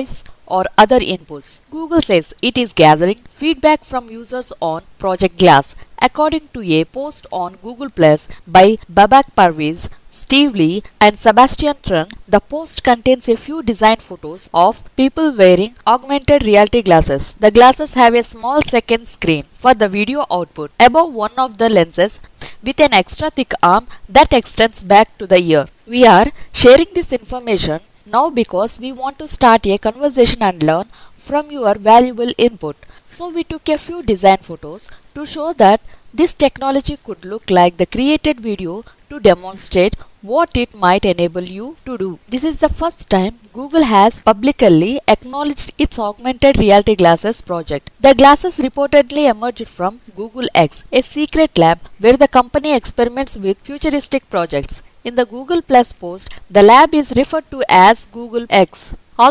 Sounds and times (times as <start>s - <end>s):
Speech: 0.0s - 59.3s.